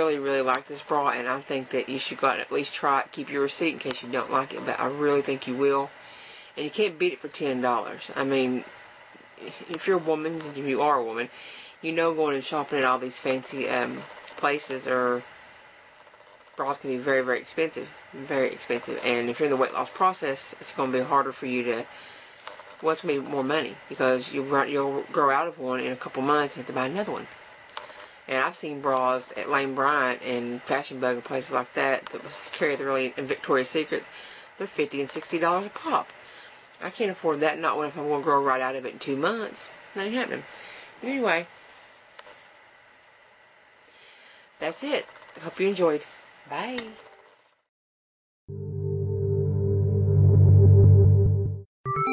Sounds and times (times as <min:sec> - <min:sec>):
Speech: 0:00.0 - 0:06.0, 0:06.6 - 0:08.7, 0:09.4 - 0:15.3, 0:16.6 - 0:21.9, 0:22.8 - 0:27.3, 0:28.3 - 0:36.1, 0:36.8 - 0:41.5, 0:44.6 - 0:47.0
Ambient music: 0:48.5 - 0:52.1.